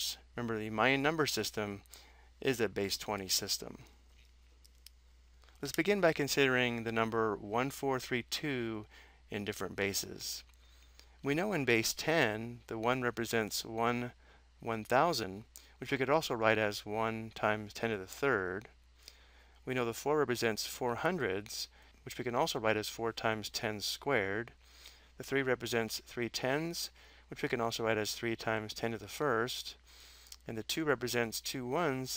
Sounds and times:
Speech: 0.0 - 1.8, 2.4 - 3.9, 5.6 - 10.5, 11.2 - 18.7, 19.7 - 24.6, 25.2 - 29.8, 30.4 - 32.1.

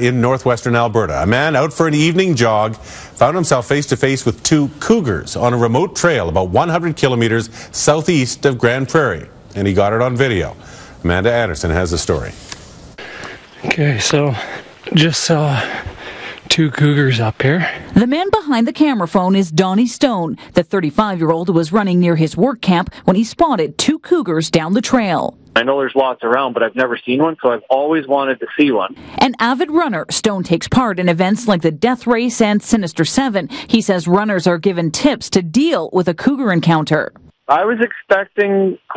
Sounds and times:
Speech: 25.6 - 29.4, 37.0 - 38.9.

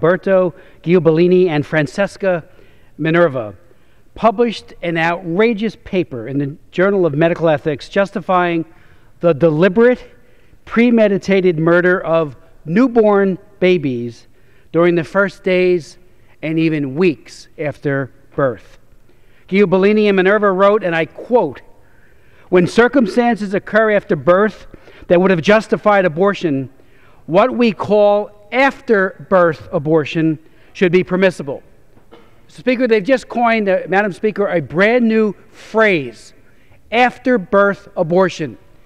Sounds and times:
Male speech, man speaking: 0.0 - 2.4, 3.0 - 3.6, 4.2 - 18.8, 19.5 - 21.7, 22.5 - 26.7, 27.3 - 31.6, 32.5 - 38.6
Narration, monologue: 0.0 - 38.8.

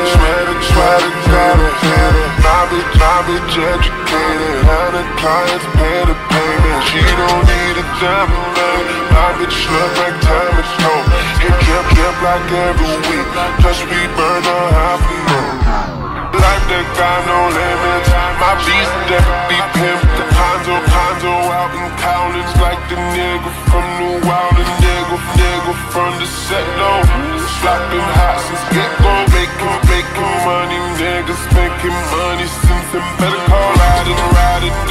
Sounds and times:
Music: 0.0 - 34.9.

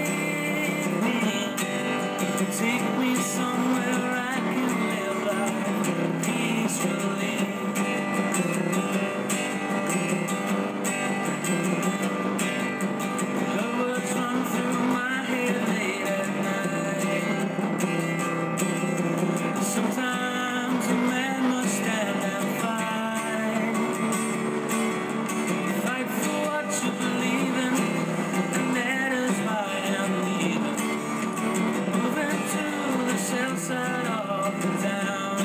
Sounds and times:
Acoustic guitar: 0.0 - 35.4.

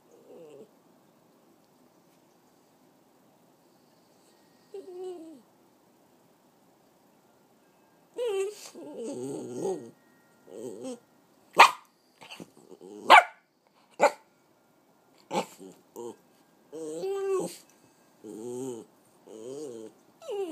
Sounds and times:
Inside, small room: 0.0 - 20.5
Whimper (dog): 0.1 - 0.7, 4.6 - 5.5, 8.2 - 11.0, 15.3 - 17.7, 18.3 - 20.5
Bark: 11.6 - 12.4, 13.1 - 13.4, 14.0 - 14.2
Bow-wow: 11.6 - 13.4.

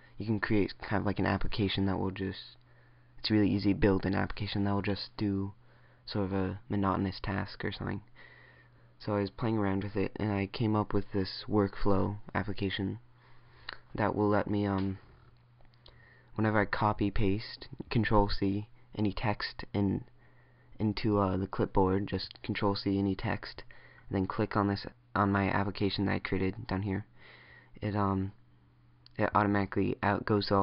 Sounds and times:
Narration, monologue: 0.0 - 30.6
Male speech, man speaking: 0.2 - 2.6, 3.2 - 8.1, 9.0 - 13.0, 13.9 - 15.1, 16.4 - 20.1, 20.8 - 27.1, 27.8 - 28.4, 29.1 - 30.6.

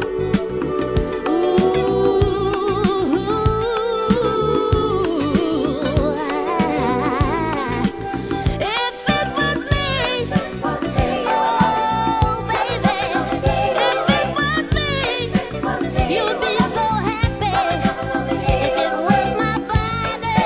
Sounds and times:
Music: 0.0 - 20.4.

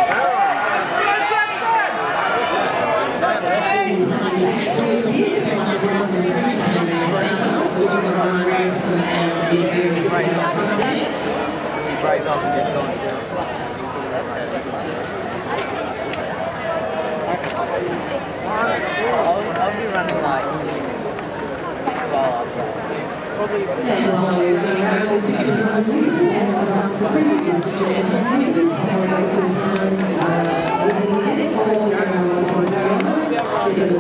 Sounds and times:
Crowd: 0.0 - 34.0
Speech: 3.0 - 34.0
Run: 14.8 - 23.7.

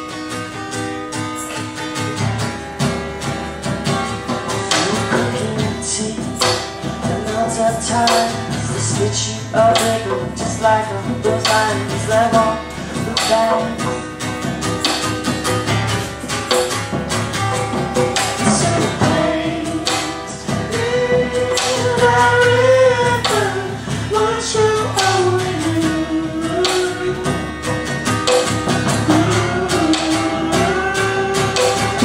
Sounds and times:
Music: 0.0 - 32.0.

